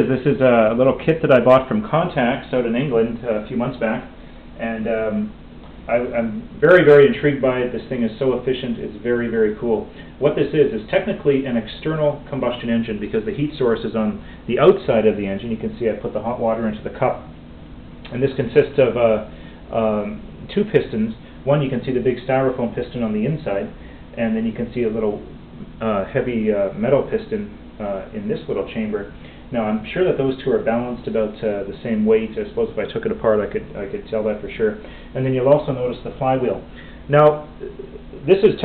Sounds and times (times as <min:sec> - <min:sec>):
Speech: 0:00.0 - 0:17.4, 0:18.1 - 0:38.6.